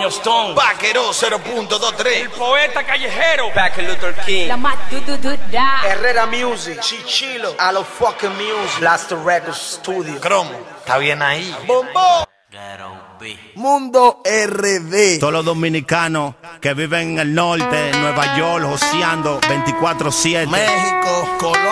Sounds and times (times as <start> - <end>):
Speech: 0.0 - 21.7.